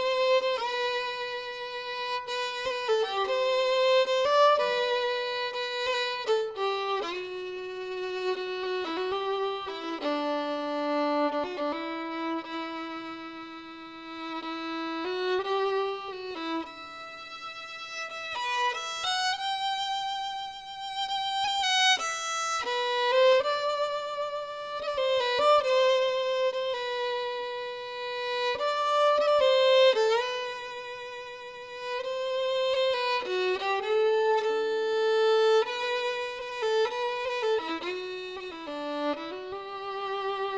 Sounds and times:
Violin, fiddle: 0.0 - 40.5.

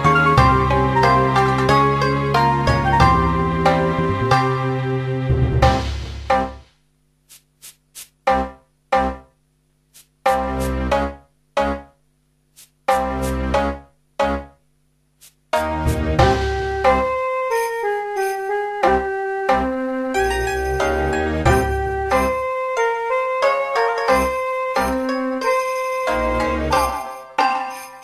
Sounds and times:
Music: 0.0 - 6.8, 8.2 - 9.4, 10.2 - 12.0, 12.9 - 14.6, 15.5 - 28.0.

